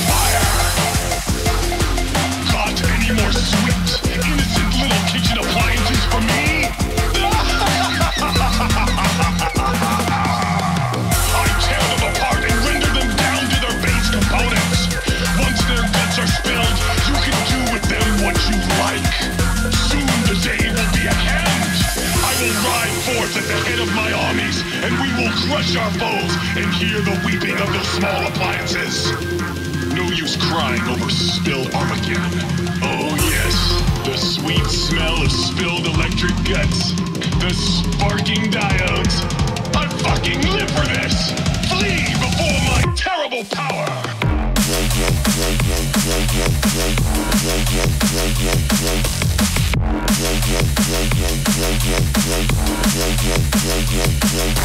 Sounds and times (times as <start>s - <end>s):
Drum and bass: 0.0s - 54.6s.